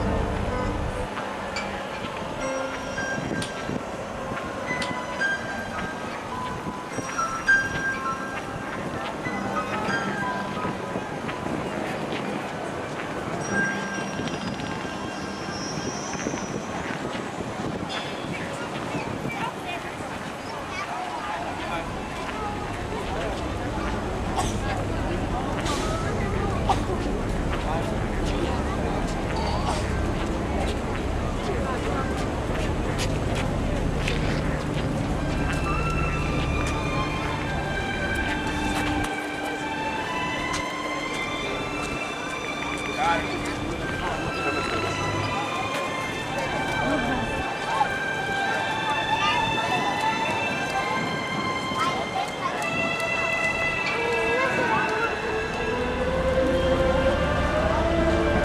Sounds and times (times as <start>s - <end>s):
Music: 0.0s - 17.2s, 21.6s - 58.4s
Outside, urban or manmade: 0.0s - 58.4s.